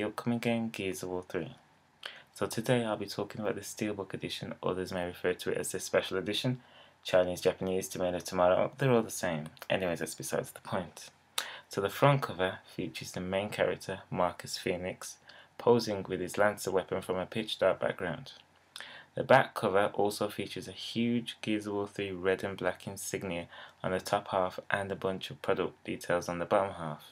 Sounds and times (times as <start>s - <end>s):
Speech: 0.0s - 18.4s, 19.1s - 27.1s.